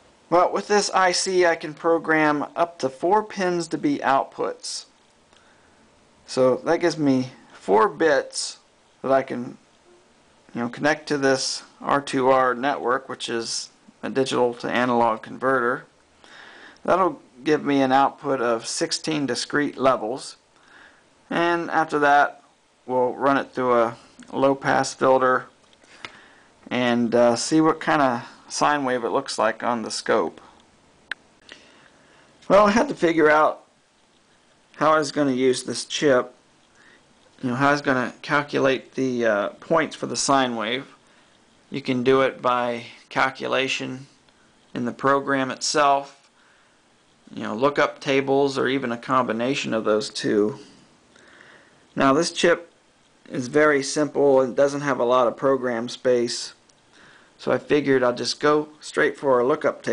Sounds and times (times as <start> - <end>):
Speech: 0.3 - 5.0, 6.3 - 9.6, 10.5 - 15.9, 16.8 - 20.4, 21.3 - 25.6, 26.7 - 30.6, 32.4 - 33.7, 34.8 - 36.4, 37.4 - 41.0, 41.7 - 46.3, 47.3 - 50.8, 52.0 - 56.6, 57.4 - 59.9.